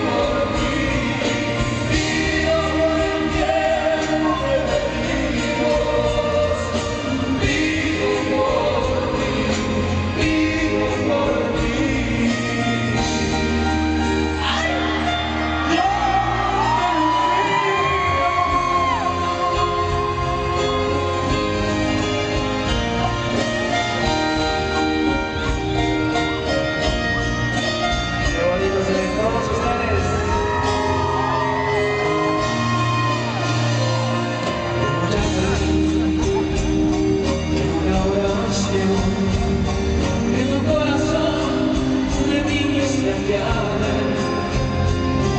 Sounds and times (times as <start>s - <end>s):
Music: 0.0s - 45.3s.